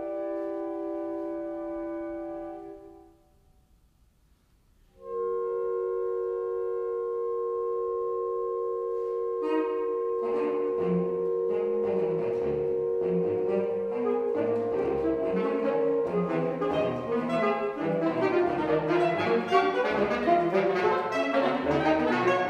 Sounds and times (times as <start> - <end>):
Saxophone: 0.0 - 3.4, 4.9 - 22.4.